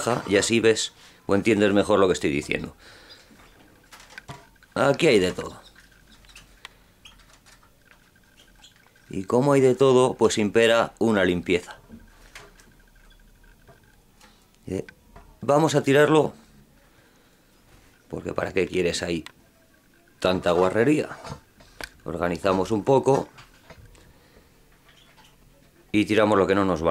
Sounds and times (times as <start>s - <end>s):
Speech: 0.0s - 2.8s, 4.8s - 5.6s, 9.1s - 11.8s, 14.6s - 16.4s, 18.1s - 19.6s, 20.2s - 21.4s, 22.1s - 23.3s, 25.8s - 26.9s.